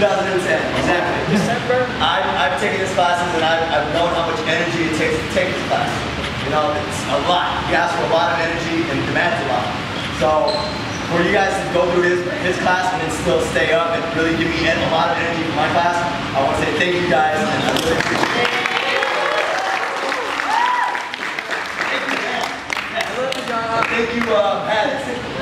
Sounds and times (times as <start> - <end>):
Speech: 0.0 - 18.8, 21.9 - 25.4.